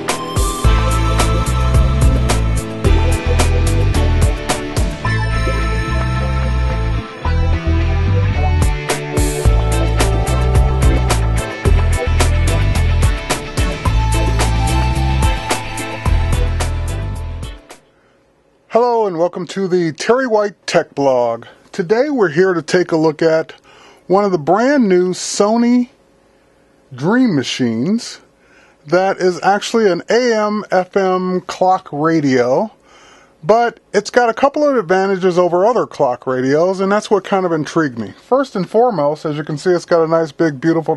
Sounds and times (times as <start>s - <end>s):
Speech: 18.7s - 26.0s, 26.9s - 28.3s, 28.9s - 32.8s, 33.4s - 40.9s.